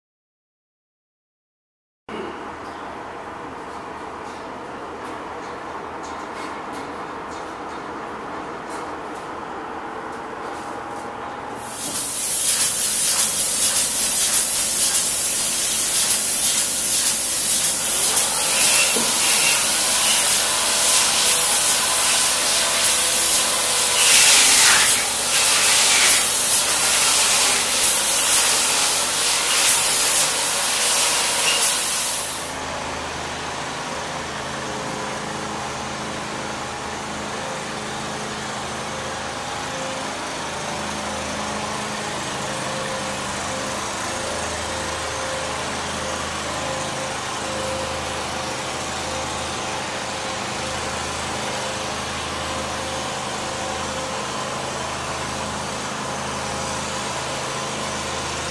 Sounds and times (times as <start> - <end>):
Spray: 11.6 - 32.6.